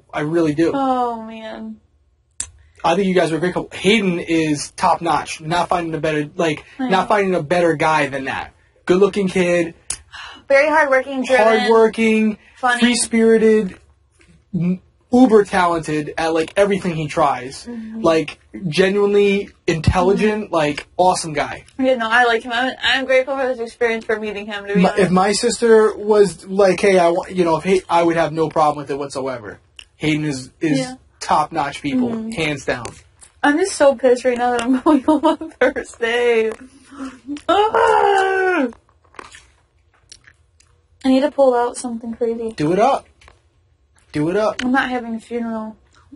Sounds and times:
Chewing, mastication: 36.5s - 41.1s, 42.5s - 44.2s, 45.8s - 46.1s.

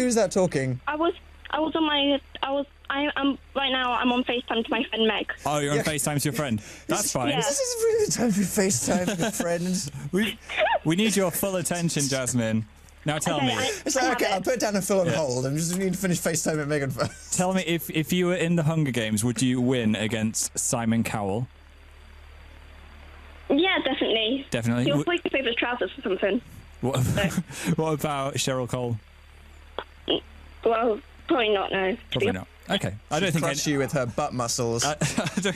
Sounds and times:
Radio: 0.0s - 21.4s, 23.5s - 29.0s, 30.7s - 35.5s
Speech: 0.0s - 21.5s, 23.5s - 29.0s, 30.7s - 35.5s.

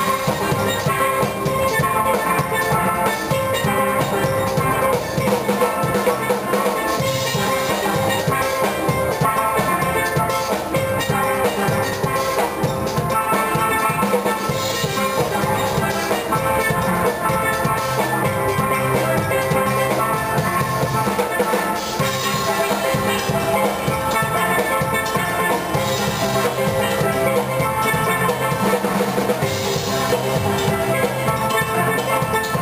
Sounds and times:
Drum: 0.0s - 32.6s
Steelpan: 0.0s - 32.6s.

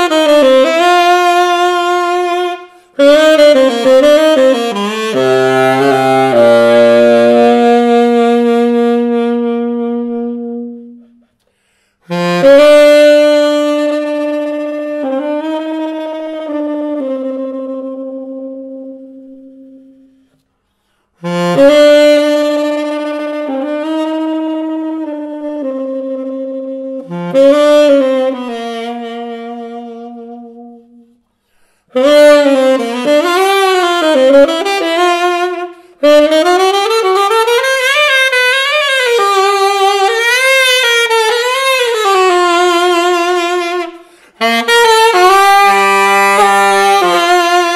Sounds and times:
Brass instrument: 0.0s - 47.7s
Saxophone: 0.0s - 47.7s.

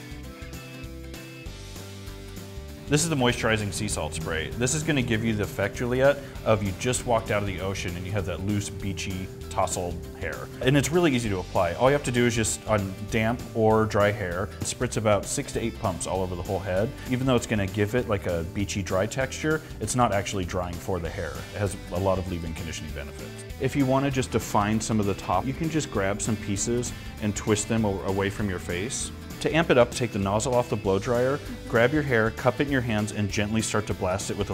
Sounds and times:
Music: 0.0s - 34.5s
Speech: 2.9s - 34.5s.

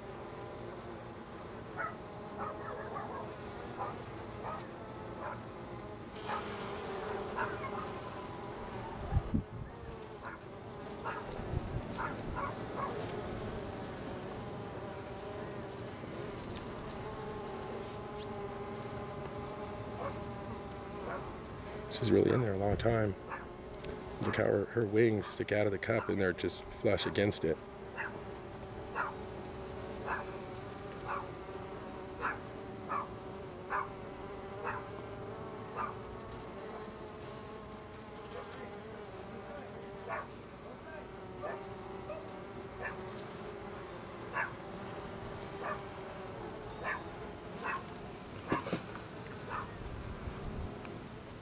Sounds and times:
Bee, wasp, etc.: 0.0s - 51.4s
Fly, housefly: 0.0s - 51.4s.

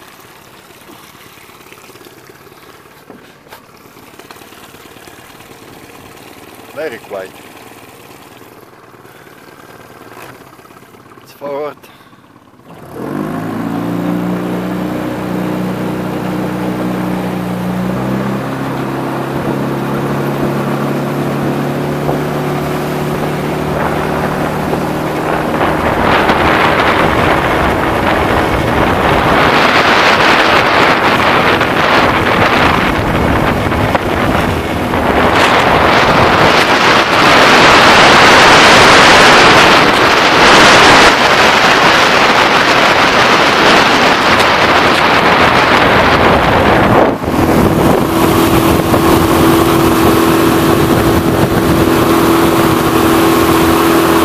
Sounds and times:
Motorboat, speedboat: 0.0s - 54.2s.

